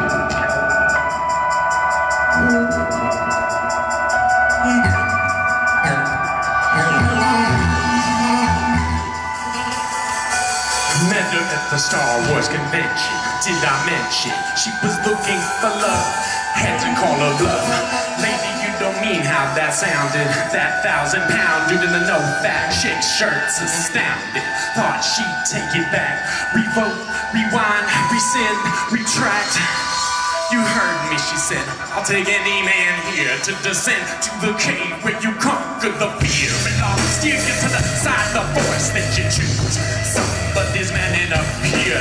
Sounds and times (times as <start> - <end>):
Dubstep: 0.0 - 42.0.